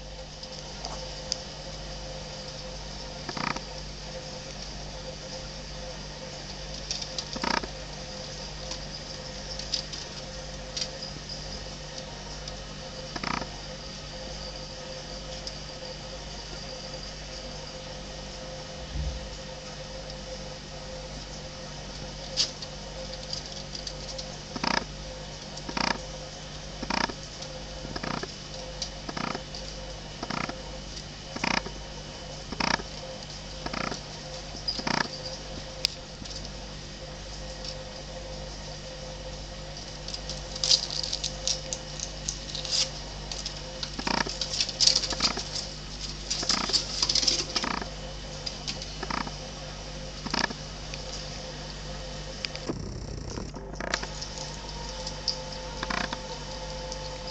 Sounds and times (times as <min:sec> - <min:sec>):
Animal: 0:00.1 - 0:57.3.